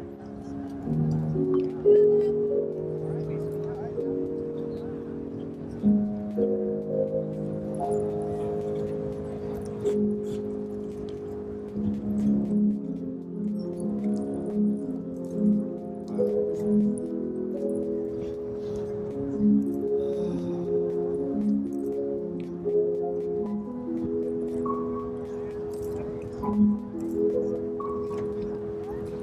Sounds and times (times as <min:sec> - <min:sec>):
New-age music: 0:00.0 - 0:29.2.